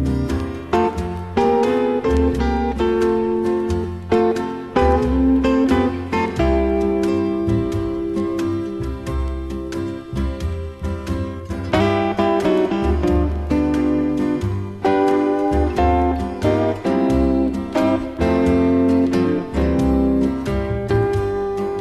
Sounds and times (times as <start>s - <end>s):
Music: 0.0s - 21.8s.